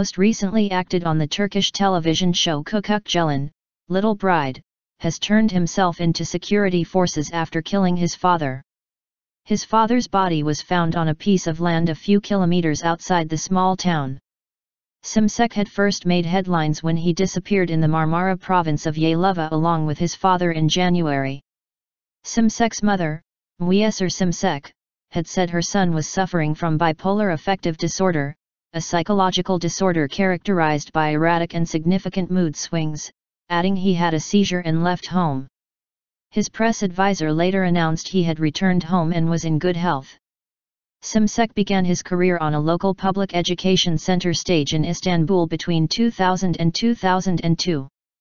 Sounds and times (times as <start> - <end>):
Speech: 0.0 - 8.6, 9.5 - 14.2, 15.0 - 21.4, 22.3 - 35.5, 36.3 - 40.2, 41.0 - 47.9.